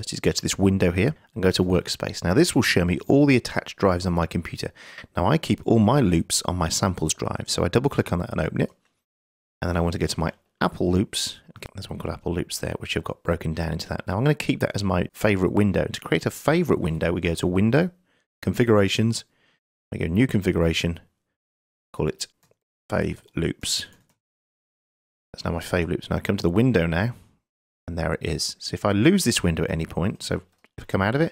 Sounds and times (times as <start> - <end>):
Speech: 0.0 - 8.8, 9.6 - 19.3, 19.9 - 21.1, 22.0 - 24.0, 25.4 - 27.3, 27.9 - 31.3.